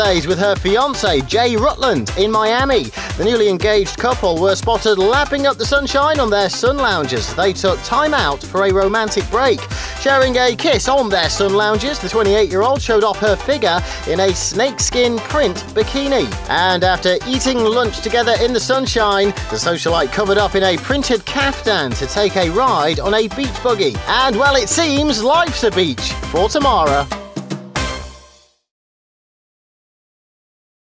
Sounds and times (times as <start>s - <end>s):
Speech: 0.0s - 27.1s
Music: 0.0s - 28.7s.